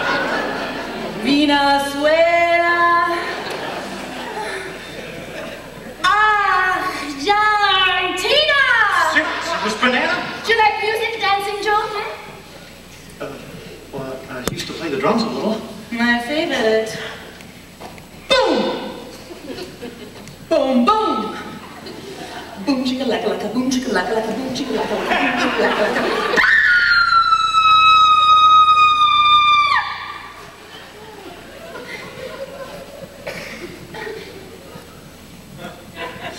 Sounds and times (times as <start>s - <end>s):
Inside, large room or hall: 0.0s - 36.3s.